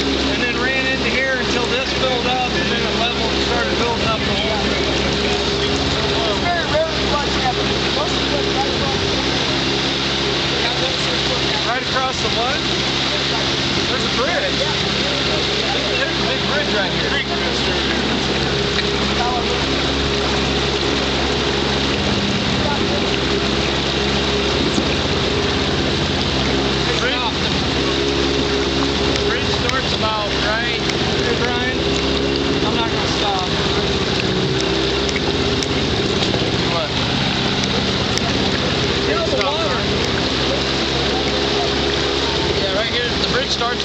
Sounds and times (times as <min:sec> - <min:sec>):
Motorboat, speedboat: 0:00.0 - 0:43.8
Speech: 0:00.2 - 0:18.2, 0:18.9 - 0:20.4, 0:22.4 - 0:23.8, 0:26.8 - 0:28.2, 0:29.2 - 0:31.8, 0:32.6 - 0:33.9, 0:36.4 - 0:37.0, 0:38.1 - 0:43.8.